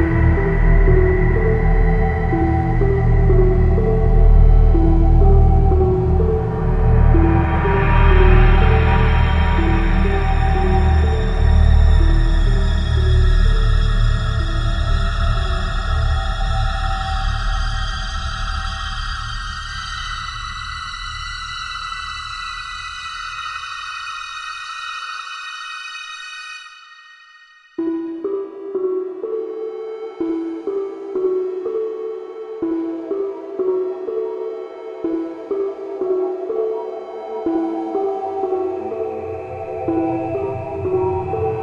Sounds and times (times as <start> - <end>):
Scary music: 0.0 - 41.6.